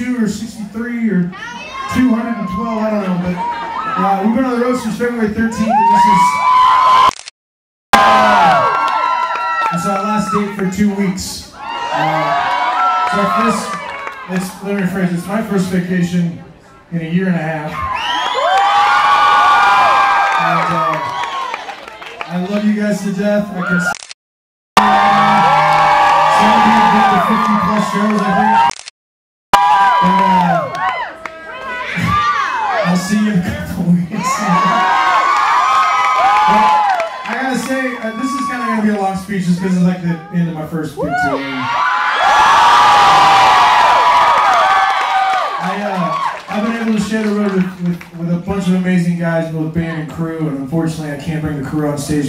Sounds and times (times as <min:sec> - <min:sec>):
Speech: 0:00.0 - 0:03.4, 0:04.0 - 0:06.4, 0:09.7 - 0:12.4, 0:13.1 - 0:17.8, 0:22.3 - 0:23.9, 0:26.3 - 0:28.6, 0:32.8 - 0:34.8, 0:36.5 - 0:41.7, 0:45.6 - 0:52.2.